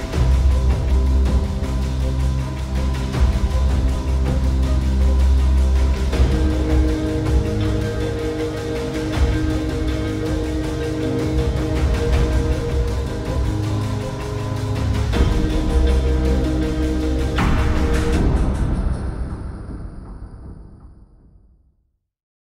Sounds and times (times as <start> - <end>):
Rhythm and blues: 0.0 - 19.8
New-age music: 0.0 - 20.7.